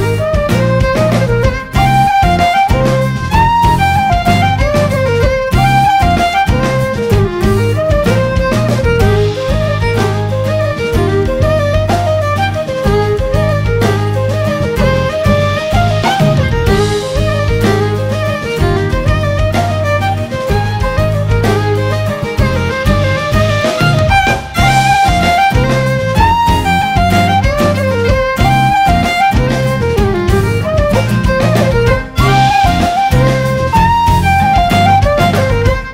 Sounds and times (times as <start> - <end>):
Music: 0.0 - 35.9.